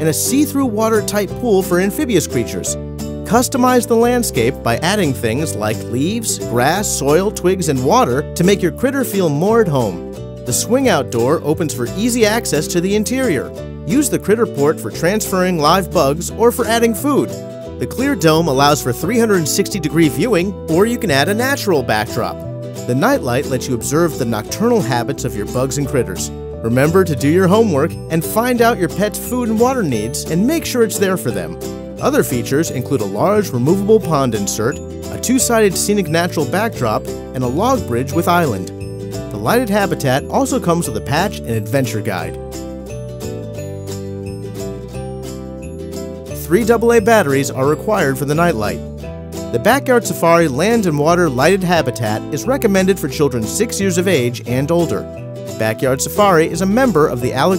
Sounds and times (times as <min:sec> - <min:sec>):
Speech: 0:00.0 - 0:38.7, 0:39.3 - 0:42.4, 0:46.4 - 0:48.8, 0:49.6 - 0:57.5
Music: 0:00.0 - 0:57.5.